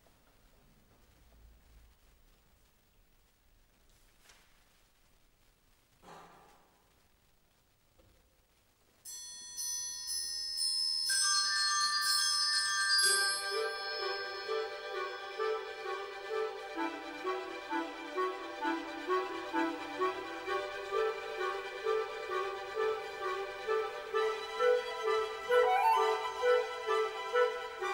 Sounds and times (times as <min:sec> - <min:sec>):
Orchestra: 0:11.4 - 0:27.9.